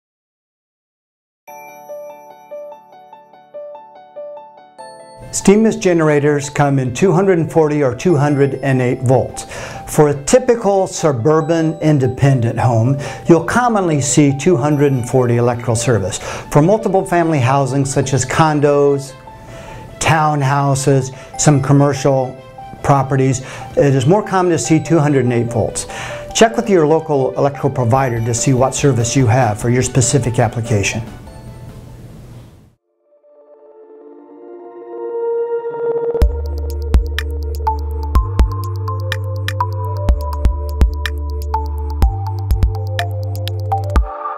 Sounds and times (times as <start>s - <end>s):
Music: 1.5s - 32.2s, 32.8s - 44.3s
Speech: 5.4s - 19.2s, 20.0s - 31.1s.